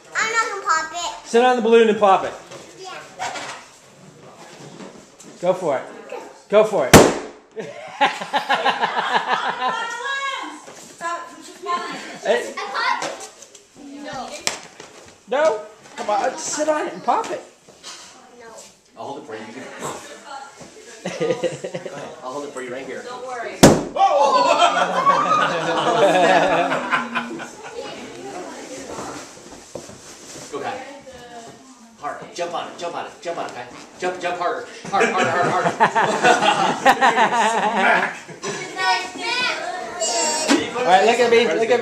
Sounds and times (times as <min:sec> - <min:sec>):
Burst, pop: 0:06.9 - 0:07.5, 0:23.6 - 0:24.0.